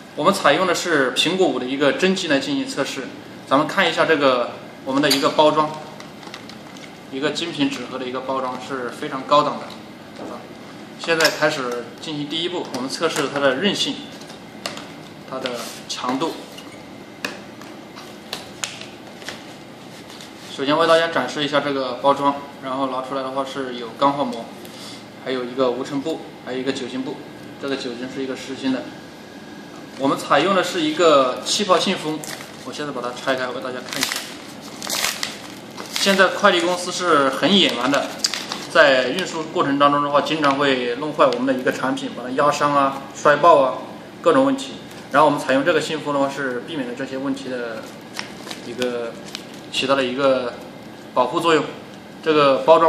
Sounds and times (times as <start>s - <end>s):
Speech: 0.2s - 5.9s, 7.1s - 14.1s, 15.3s - 16.5s, 20.5s - 24.5s, 25.2s - 28.9s, 30.0s - 34.2s, 36.0s - 47.9s, 48.6s - 50.6s, 51.2s - 52.8s.